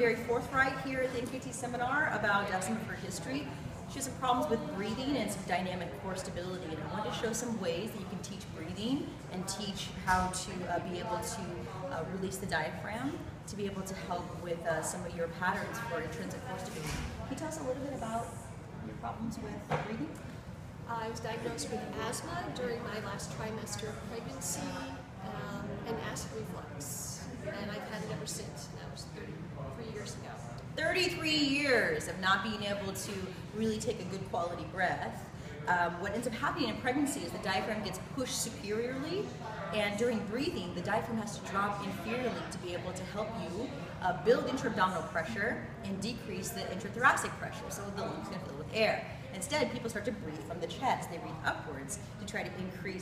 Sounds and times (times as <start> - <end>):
Speech: 0.0 - 20.2, 20.9 - 53.0.